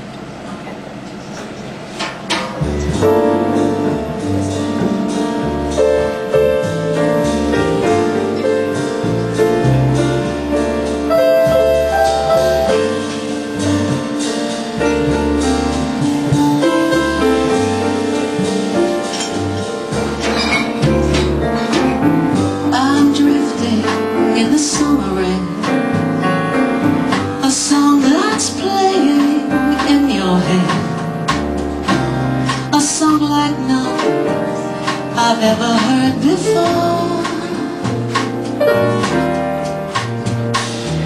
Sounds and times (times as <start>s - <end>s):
Jazz: 0.0s - 41.0s
Tender music: 2.8s - 41.0s.